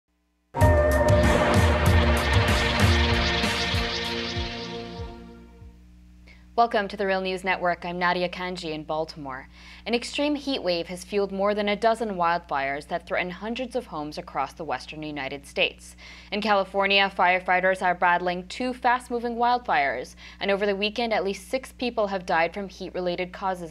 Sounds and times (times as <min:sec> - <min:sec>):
Music: 0:00.6 - 0:05.8
Speech: 0:06.6 - 0:23.7.